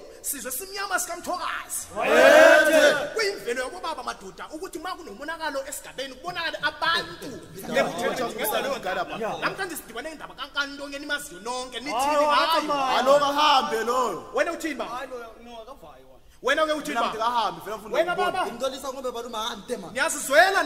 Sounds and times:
Speech: 0:00.0 - 0:20.6.

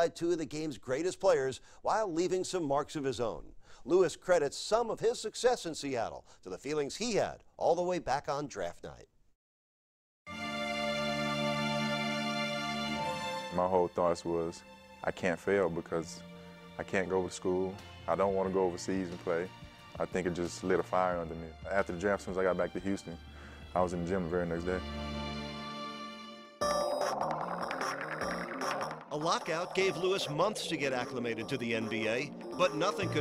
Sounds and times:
Speech: 0:00.0 - 0:09.1, 0:13.5 - 0:16.2, 0:16.8 - 0:23.2, 0:23.8 - 0:24.8, 0:29.1 - 0:33.2
Music: 0:10.3 - 0:33.2.

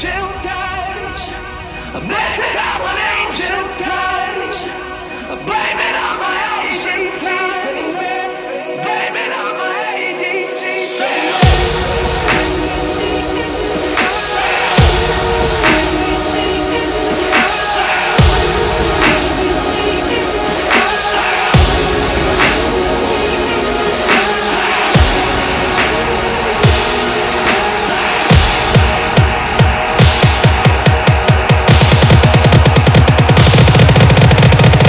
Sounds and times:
Dubstep: 0:10.7 - 0:34.8.

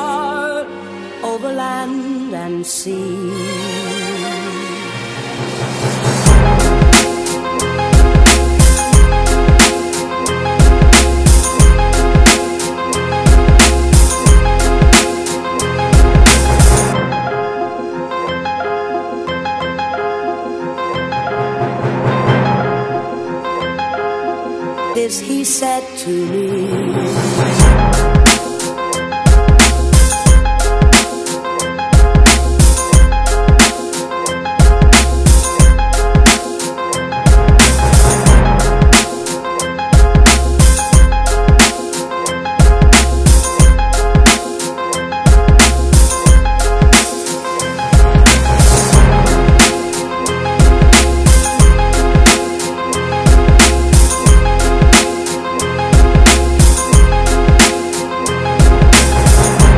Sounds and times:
Hip hop music: 0:02.9 - 0:59.7.

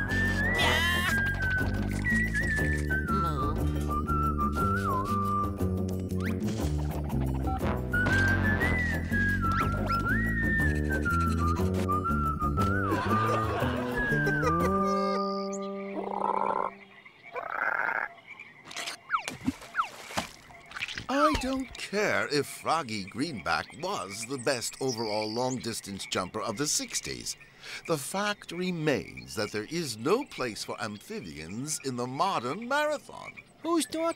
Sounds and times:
Croak: 0:15.0 - 0:21.8.

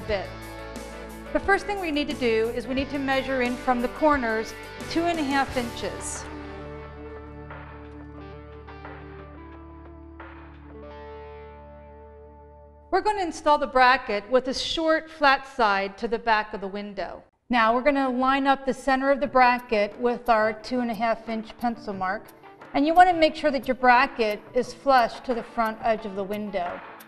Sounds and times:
Speech: 0:00.0 - 0:00.3, 0:01.4 - 0:06.2, 0:13.0 - 0:26.8
Music: 0:00.0 - 0:14.2, 0:17.8 - 0:27.0.

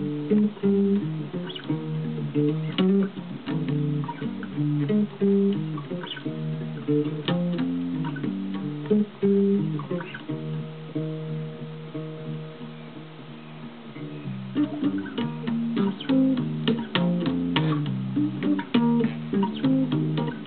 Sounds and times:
Bass guitar: 0:00.0 - 0:20.4.

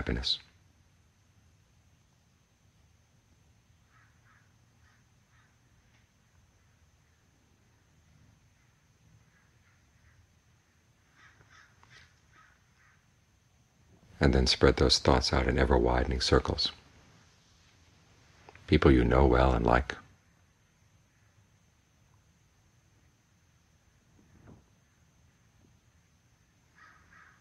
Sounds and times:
Caw: 0:03.9 - 0:05.6, 0:11.1 - 0:13.0, 0:26.7 - 0:27.4.

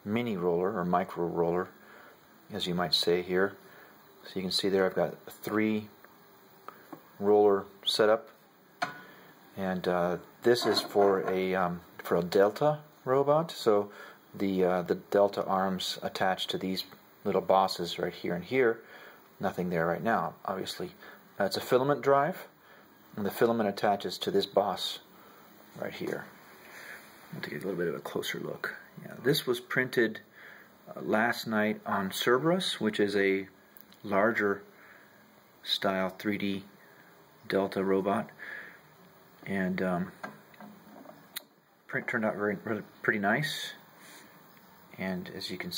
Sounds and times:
Speech: 0:00.0 - 0:01.8, 0:02.5 - 0:03.6, 0:04.2 - 0:06.0, 0:07.2 - 0:08.4, 0:09.6 - 0:18.8, 0:19.4 - 0:25.1, 0:25.8 - 0:26.4, 0:27.3 - 0:30.3, 0:30.9 - 0:34.7, 0:35.6 - 0:36.7, 0:37.4 - 0:38.4, 0:39.4 - 0:40.2, 0:41.9 - 0:43.9, 0:44.9 - 0:45.7.

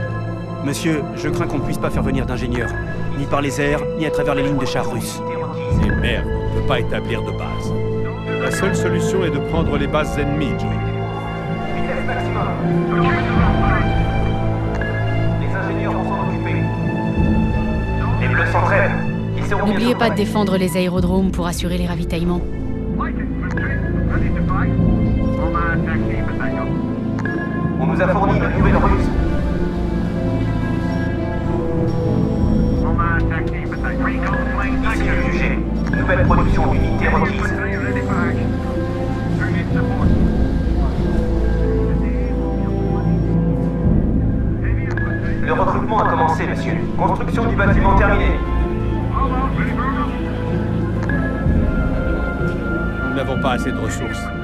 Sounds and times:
Music: 0:00.0 - 0:54.4
Speech: 0:00.6 - 0:07.7, 0:08.4 - 0:10.8, 0:11.8 - 0:14.0, 0:15.4 - 0:16.7, 0:18.0 - 0:22.4, 0:23.0 - 0:26.8, 0:27.8 - 0:29.2, 0:32.9 - 0:38.5, 0:44.7 - 0:48.5, 0:49.2 - 0:50.3, 0:53.1 - 0:54.3.

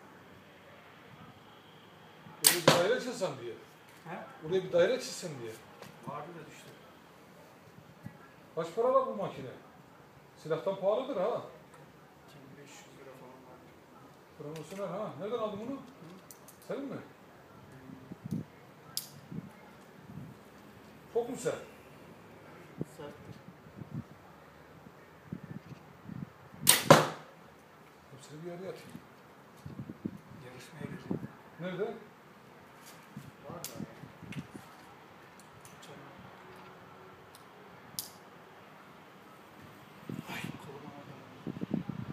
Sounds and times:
Arrow: 0:02.4 - 0:02.9, 0:26.6 - 0:27.3.

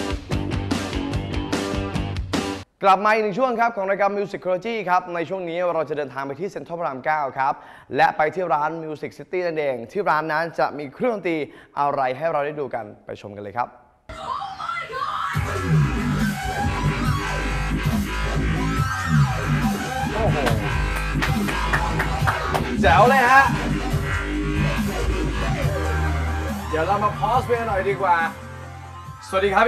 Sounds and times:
Speech: 0:02.8 - 0:13.8, 0:22.8 - 0:23.6, 0:29.2 - 0:29.6.

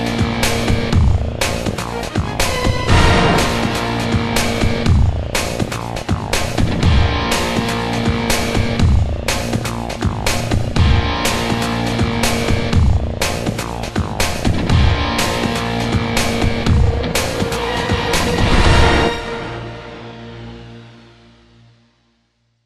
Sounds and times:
Music: 0:00.0 - 0:22.6
Sound effect: 0:01.9 - 0:06.0, 0:16.2 - 0:21.0.

